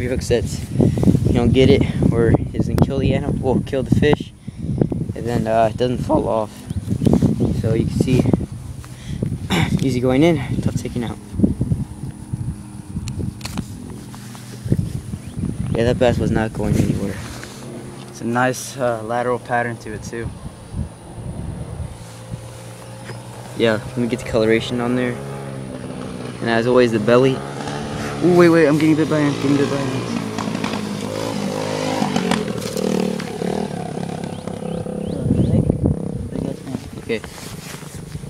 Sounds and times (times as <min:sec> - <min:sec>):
Outside, rural or natural: 0:00.0 - 0:38.3
Speech: 0:01.3 - 0:04.3, 0:05.2 - 0:06.6, 0:09.7 - 0:11.2, 0:15.8 - 0:17.2, 0:18.2 - 0:20.3, 0:23.6 - 0:25.2, 0:26.4 - 0:27.4, 0:28.2 - 0:30.2, 0:36.3 - 0:37.3.